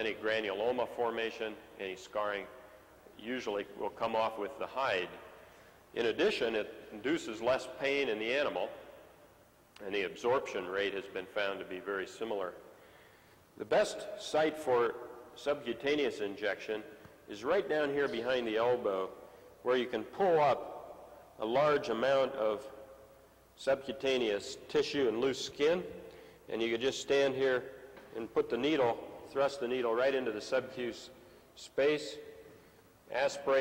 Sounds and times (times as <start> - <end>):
Speech: 0.0 - 5.2, 6.0 - 8.8, 9.8 - 12.6, 13.6 - 20.7, 21.4 - 22.8, 23.6 - 32.3, 33.1 - 33.6.